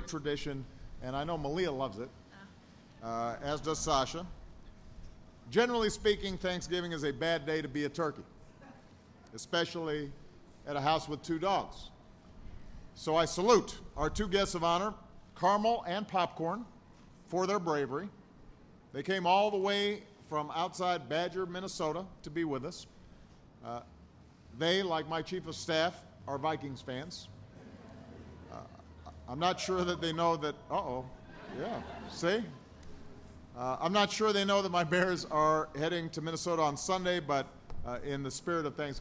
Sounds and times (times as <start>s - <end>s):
Speech: 0.0s - 4.3s, 5.5s - 8.3s, 13.0s - 16.7s, 17.3s - 18.2s, 19.0s - 22.9s, 24.6s - 27.3s, 28.5s - 32.6s, 33.6s - 39.0s.